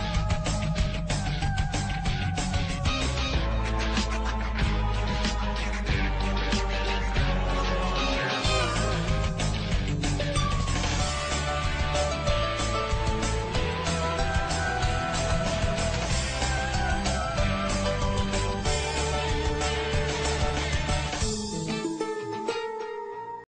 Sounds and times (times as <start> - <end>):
Music: 0.0 - 23.5.